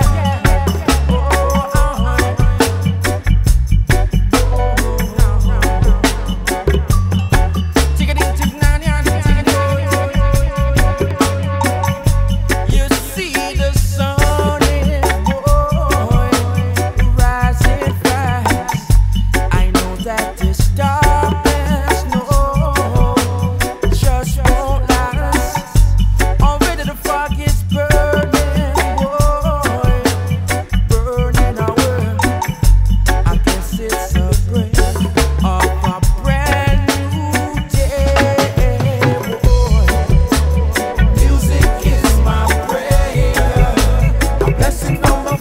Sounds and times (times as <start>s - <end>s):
Music: 0.0s - 45.4s.